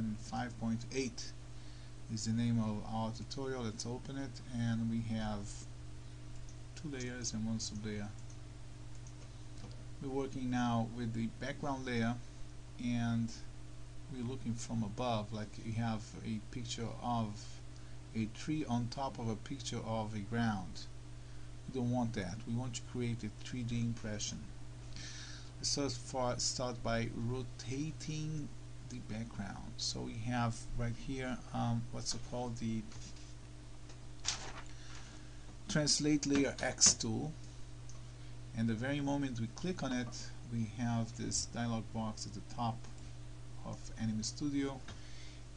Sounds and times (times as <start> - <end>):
Speech: 0.0 - 1.4, 2.1 - 5.7, 6.8 - 8.2, 10.0 - 12.2, 12.8 - 13.5, 14.1 - 20.9, 21.7 - 24.5, 25.6 - 33.0, 35.7 - 37.4, 38.5 - 42.9, 43.6 - 44.9.